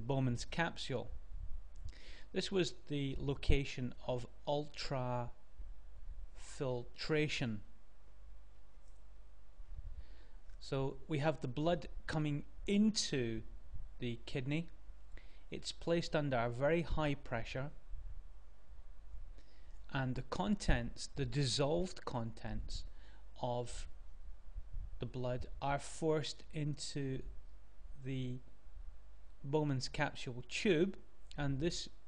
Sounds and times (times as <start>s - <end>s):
Speech: 0.0s - 1.2s, 2.3s - 5.4s, 6.4s - 7.7s, 10.6s - 14.8s, 15.5s - 17.8s, 19.9s - 23.9s, 25.0s - 27.3s, 28.0s - 28.5s, 29.4s - 32.0s.